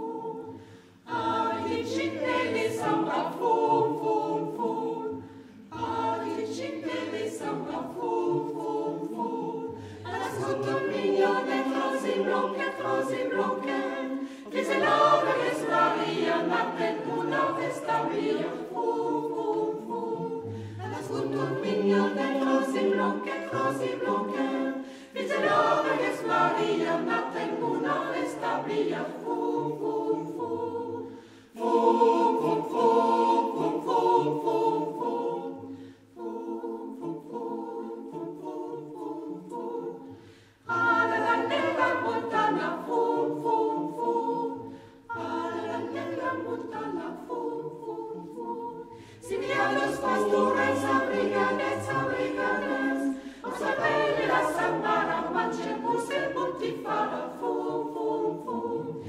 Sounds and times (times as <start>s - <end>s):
Mantra: 0.0s - 59.0s.